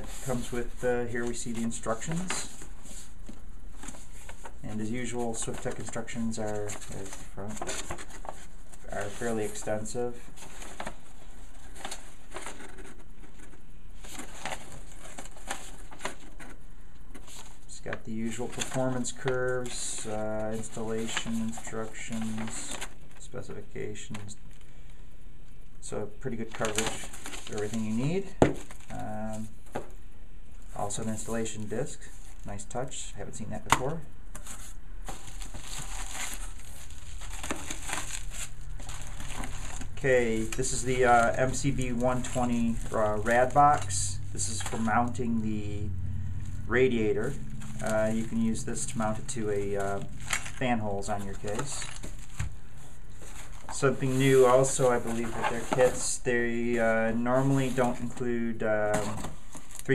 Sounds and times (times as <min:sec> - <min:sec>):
Speech: 0:00.0 - 0:02.6, 0:04.6 - 0:07.7, 0:08.8 - 0:10.3, 0:17.7 - 0:24.4, 0:25.8 - 0:29.6, 0:30.7 - 0:34.1, 0:40.0 - 0:45.9, 0:46.6 - 0:51.9, 0:53.7 - 0:59.9.